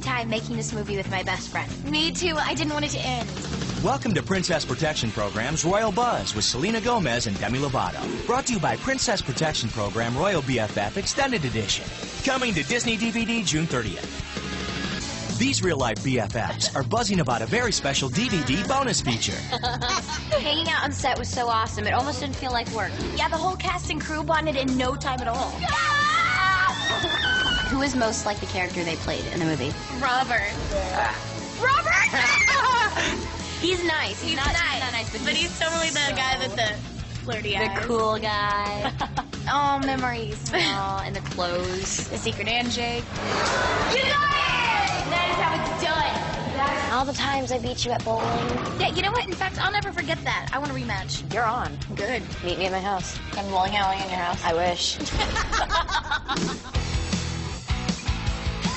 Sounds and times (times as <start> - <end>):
Music: 0.0 - 58.7.